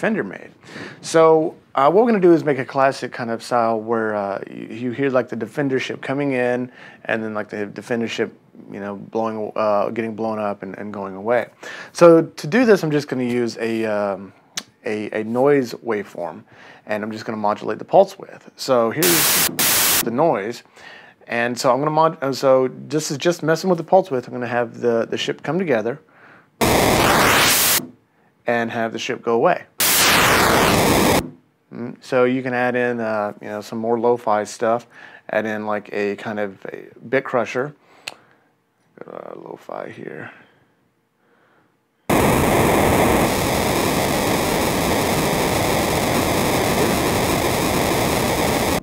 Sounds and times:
Speech: 0.0s - 19.3s, 20.0s - 26.1s, 28.5s - 29.8s, 31.7s - 37.8s, 39.0s - 40.5s.

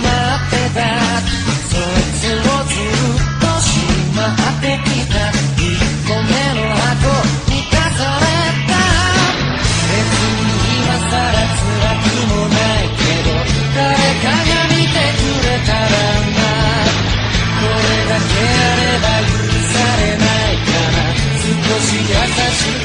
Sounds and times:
Music: 0.0s - 22.8s.

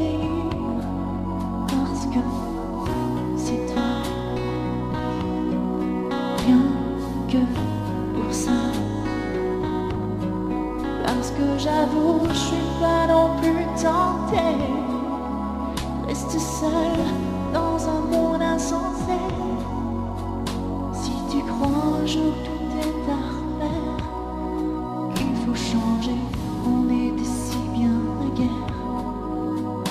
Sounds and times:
Music: 0.0s - 29.9s.

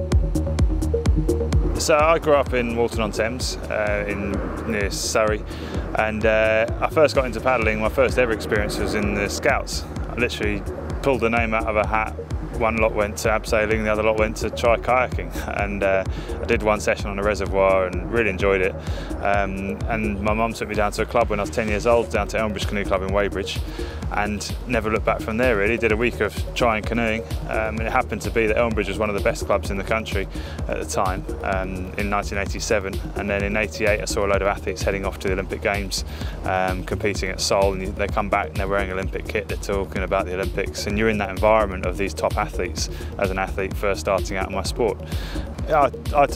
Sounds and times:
Music: 0.0s - 46.3s
Speech: 1.8s - 45.0s, 45.6s - 46.3s.

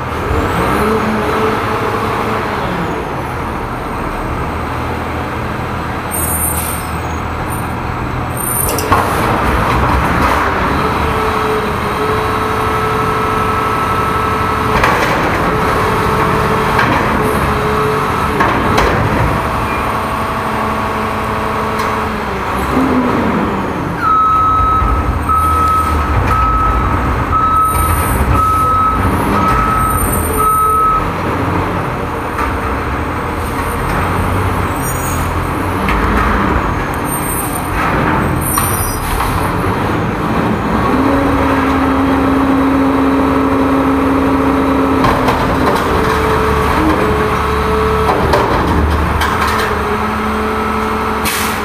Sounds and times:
Reversing beeps: 24.0s - 31.1s.

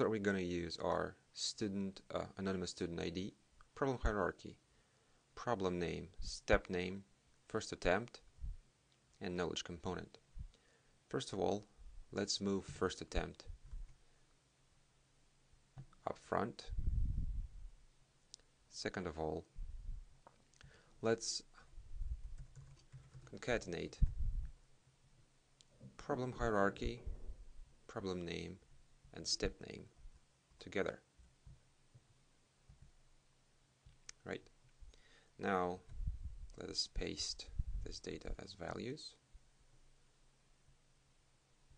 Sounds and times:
Speech: 0.0s - 4.6s, 5.4s - 8.3s, 9.2s - 10.2s, 11.1s - 13.5s, 16.0s - 16.8s, 18.7s - 19.5s, 21.0s - 21.6s, 23.3s - 24.1s, 26.0s - 27.1s, 27.9s - 30.0s, 30.6s - 31.1s, 34.1s - 34.5s, 35.4s - 35.9s, 36.6s - 39.2s
Computer keyboard: 22.2s - 23.4s.

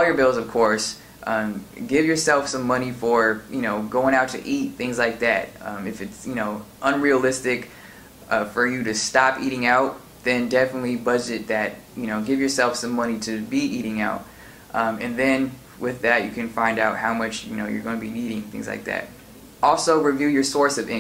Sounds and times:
Speech: 0.0s - 7.7s, 8.3s - 21.0s.

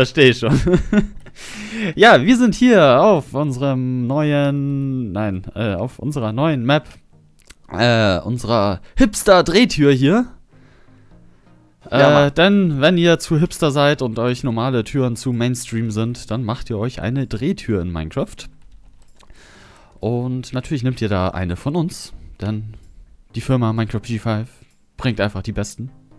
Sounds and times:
Speech: 0.0s - 0.6s, 2.0s - 7.0s, 7.7s - 10.4s, 11.9s - 18.5s, 20.0s - 22.8s, 23.4s - 25.9s.

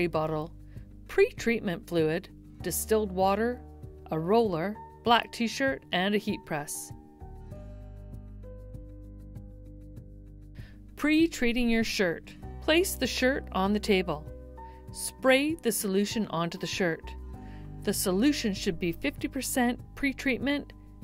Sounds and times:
Speech: 0.0s - 0.5s, 1.1s - 7.0s, 11.0s - 14.3s, 15.0s - 17.2s, 17.8s - 20.7s
Music: 0.0s - 21.0s.

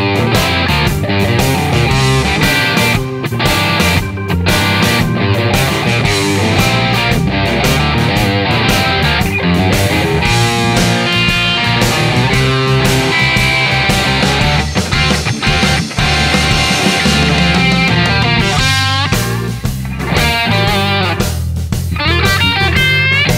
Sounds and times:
Music: 0.0s - 23.3s.

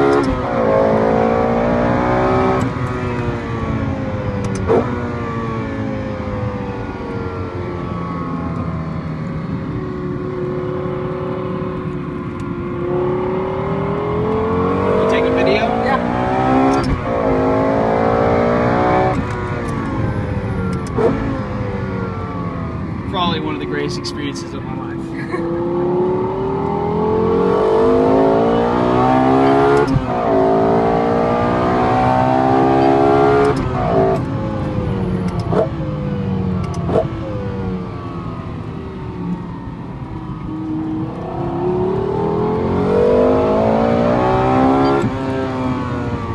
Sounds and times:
Car: 0.0s - 46.3s
Speech: 23.1s - 25.1s.

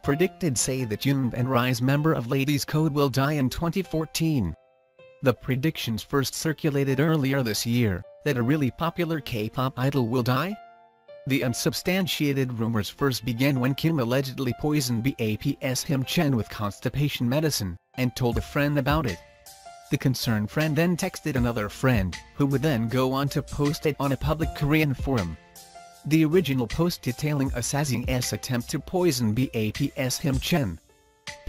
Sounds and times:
Speech: 0.0s - 4.6s, 5.2s - 10.6s, 11.3s - 19.2s, 19.9s - 25.4s, 26.1s - 30.8s
Music: 0.0s - 31.4s.

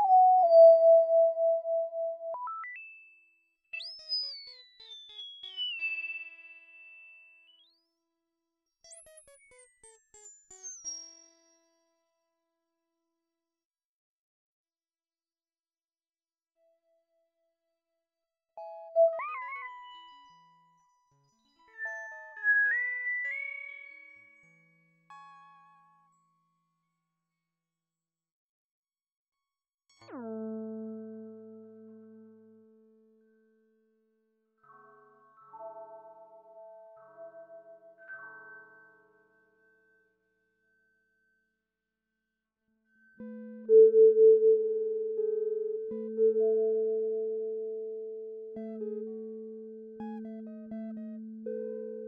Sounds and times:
Music: 0.0s - 13.6s, 16.6s - 17.7s, 18.6s - 28.3s, 29.4s - 52.0s.

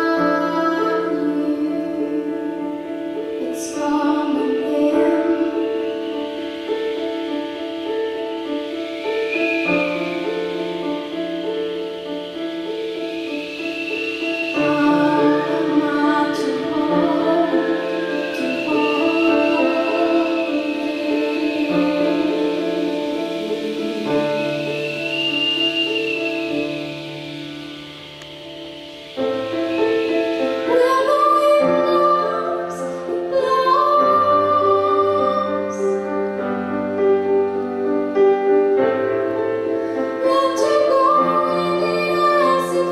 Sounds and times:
Music: 0.0s - 42.9s
Rustling leaves: 0.0s - 42.9s.

